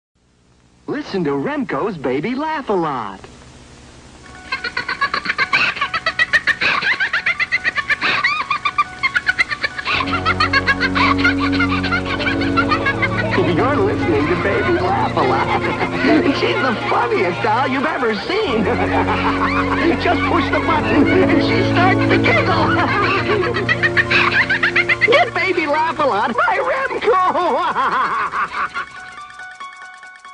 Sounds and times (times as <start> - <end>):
Speech: 0.9 - 3.3, 25.1 - 27.4
Music: 4.2 - 30.3.